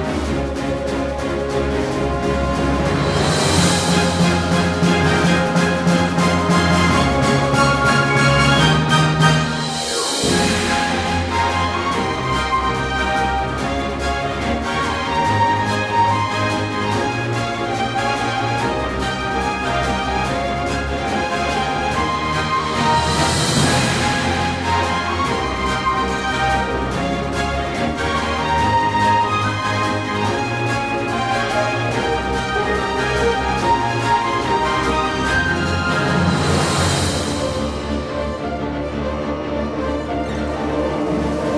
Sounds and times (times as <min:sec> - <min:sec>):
Orchestra: 0:00.0 - 0:41.5.